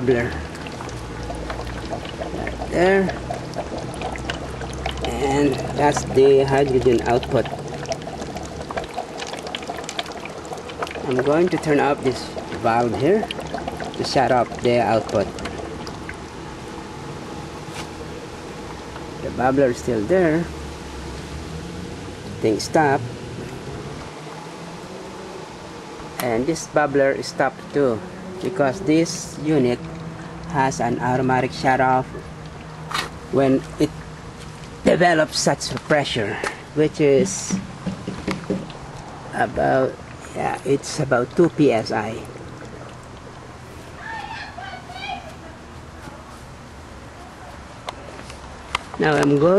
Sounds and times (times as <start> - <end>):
Speech: 5.1 - 7.5, 11.0 - 13.3, 19.2 - 20.5, 22.4 - 23.0, 26.2 - 29.8, 30.5 - 32.2, 33.4 - 33.9, 34.9 - 37.6, 39.4 - 42.3, 49.0 - 49.5.